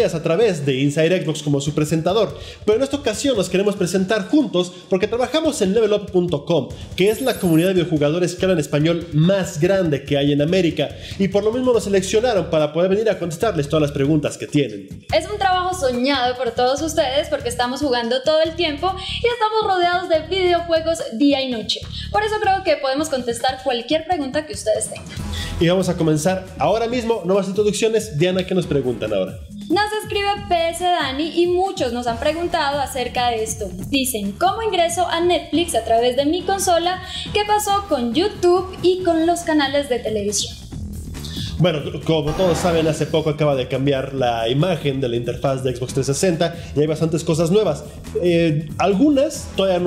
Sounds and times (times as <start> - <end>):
Speech: 0.0 - 40.5, 41.6 - 49.8
Music: 0.0 - 49.8.